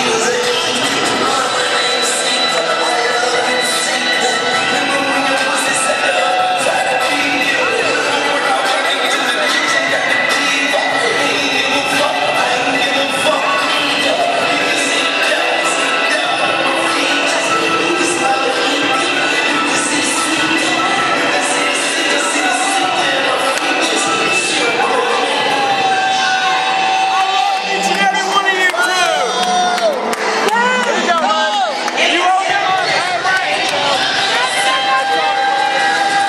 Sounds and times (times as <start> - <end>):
Inside, large room or hall: 0.0 - 36.2
Music: 0.0 - 36.2
Speech: 26.9 - 29.8.